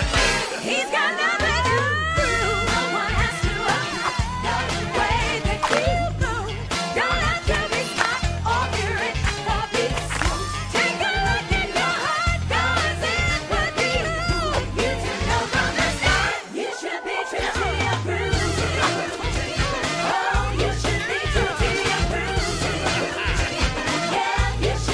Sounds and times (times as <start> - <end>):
Music: 0.0 - 24.9.